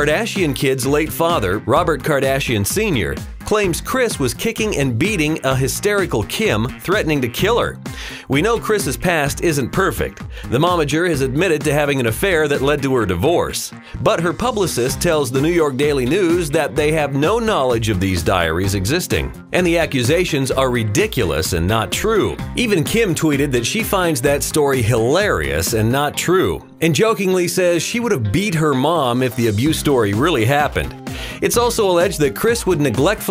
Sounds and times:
Music: 0:00.0 - 0:33.3
Speech: 0:00.0 - 0:33.3.

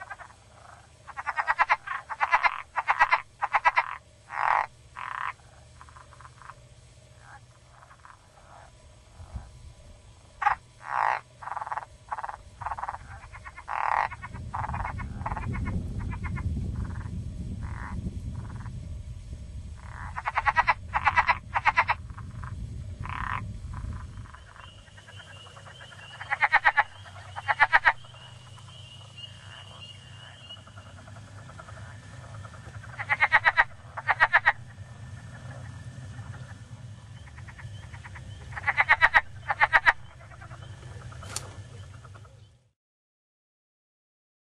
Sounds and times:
Frog: 0:00.0 - 0:09.6, 0:10.3 - 0:18.8, 0:19.8 - 0:42.7.

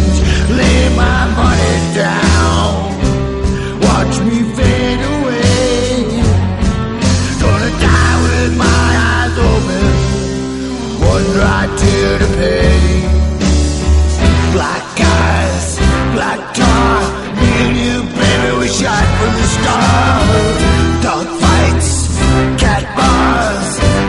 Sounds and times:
Music: 0:00.0 - 0:24.0.

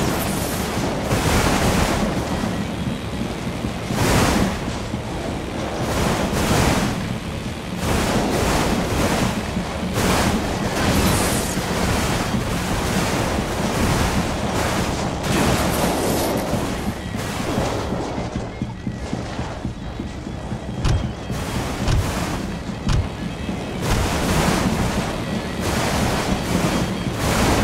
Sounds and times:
Vehicle: 0:00.0 - 0:27.6
Music: 0:07.2 - 0:27.6.

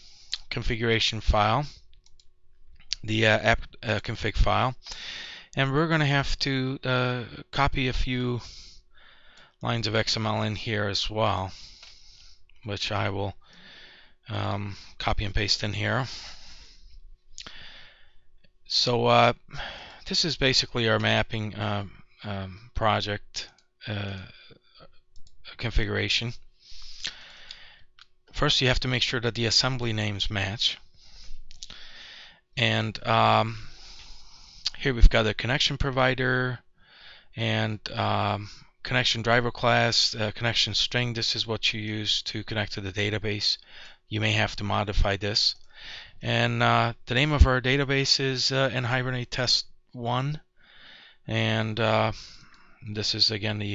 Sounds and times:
Inside, small room: 0:00.0 - 0:53.7
Speech: 0:00.4 - 0:01.8, 0:03.0 - 0:04.8, 0:05.6 - 0:08.5, 0:09.6 - 0:11.6, 0:12.6 - 0:13.4, 0:14.3 - 0:16.2, 0:18.7 - 0:19.5, 0:20.1 - 0:24.4, 0:25.5 - 0:26.4, 0:28.4 - 0:30.8, 0:32.6 - 0:33.7, 0:34.7 - 0:36.6, 0:37.4 - 0:45.6, 0:46.2 - 0:50.4, 0:51.3 - 0:53.7.

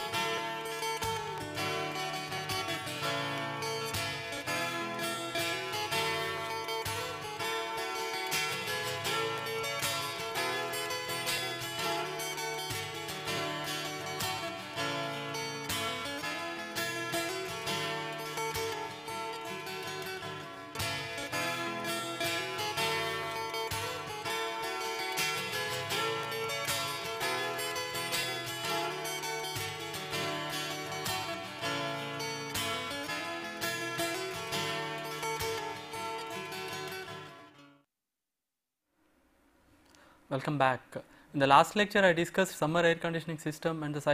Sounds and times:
Music: 0:00.0 - 0:37.9.

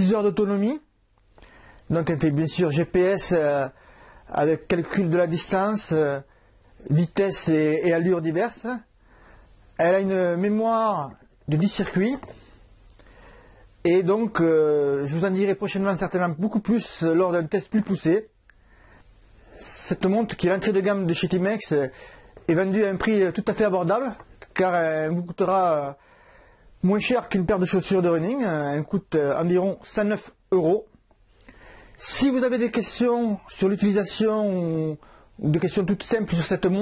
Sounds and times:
Speech: 0:00.0 - 0:00.9, 0:01.9 - 0:08.9, 0:09.8 - 0:12.4, 0:13.8 - 0:18.3, 0:19.6 - 0:26.0, 0:26.8 - 0:31.0, 0:32.0 - 0:36.8.

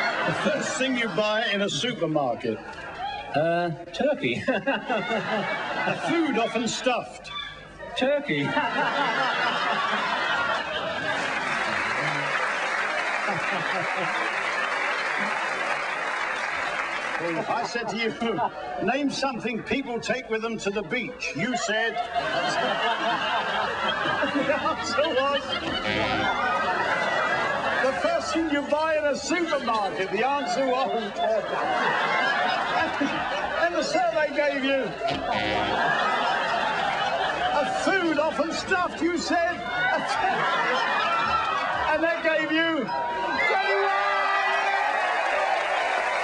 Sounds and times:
Speech: 0:33.6 - 0:35.0, 0:37.6 - 0:39.6.

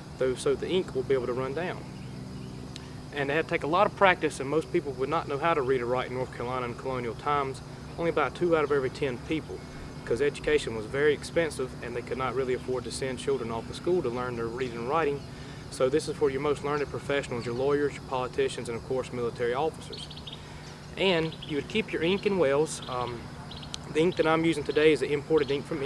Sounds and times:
Speech: 0:00.2 - 0:01.8, 0:03.1 - 0:20.1, 0:21.0 - 0:23.2, 0:23.8 - 0:25.8.

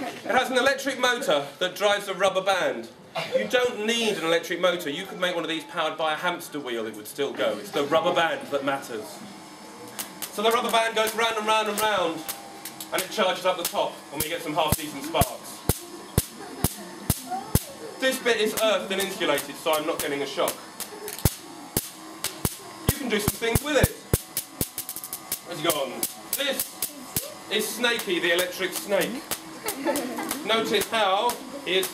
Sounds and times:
Static: 0:08.3 - 0:31.9
Speech: 0:16.4 - 0:20.6, 0:30.4 - 0:31.9.

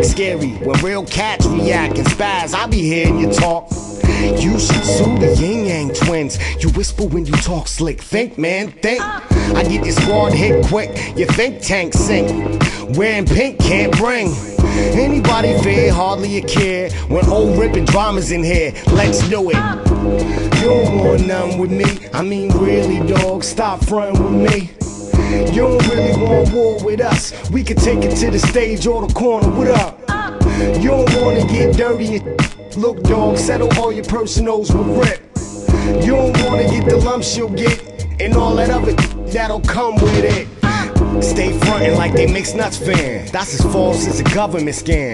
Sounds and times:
Music: 0:00.0 - 0:45.1
Rapping: 0:00.0 - 0:45.1.

